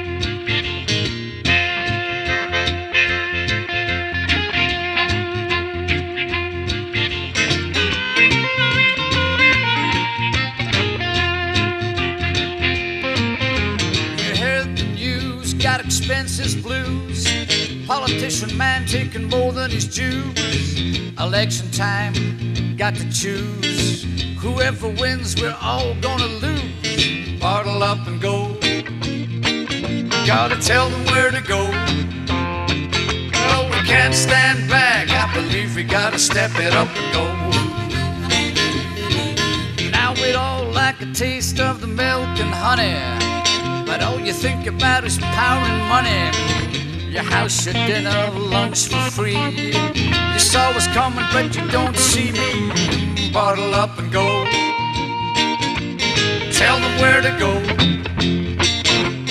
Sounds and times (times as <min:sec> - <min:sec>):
Music: 0:00.0 - 0:59.3.